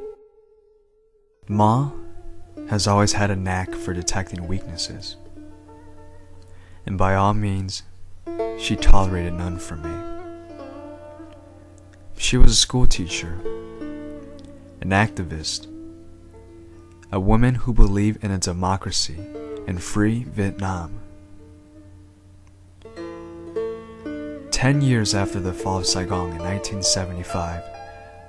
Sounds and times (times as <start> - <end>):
Music: 0.0 - 28.2
Speech: 1.5 - 2.0, 2.7 - 5.2, 6.8 - 7.9, 8.6 - 10.1, 12.2 - 13.5, 14.8 - 15.7, 17.1 - 21.0, 24.5 - 27.7.